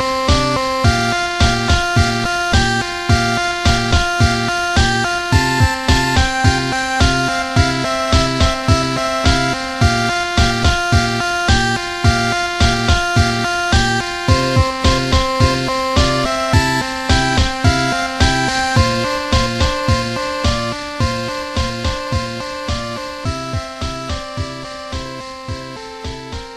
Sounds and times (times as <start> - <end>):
Music: 0.0 - 26.5.